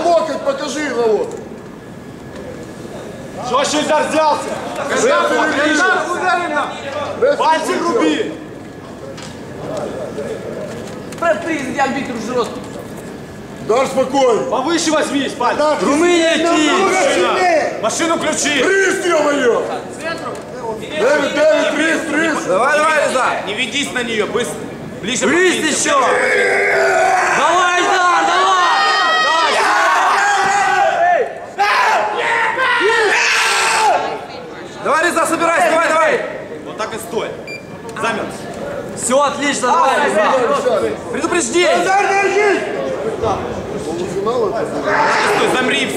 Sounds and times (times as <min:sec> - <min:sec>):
Speech: 0:00.0 - 0:01.4, 0:13.7 - 0:26.2, 0:27.3 - 0:29.9, 0:33.8 - 0:45.9.